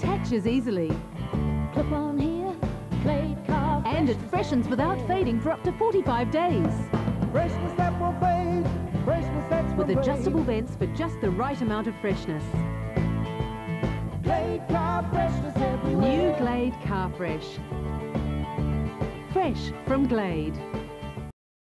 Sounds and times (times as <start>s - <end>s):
Speech: 0.0s - 1.0s, 3.8s - 6.8s, 9.7s - 12.5s, 15.9s - 17.6s, 19.3s - 20.6s
Music: 0.0s - 21.4s.